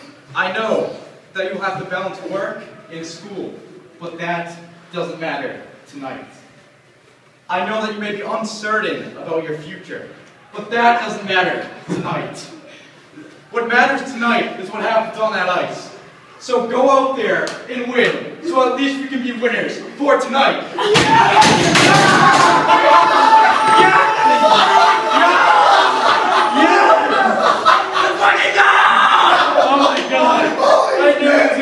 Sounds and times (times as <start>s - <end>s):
Narration, monologue: 0.0s - 20.8s
Male speech, man speaking: 0.3s - 6.4s, 7.5s - 12.6s, 13.5s - 20.7s, 29.4s - 31.6s.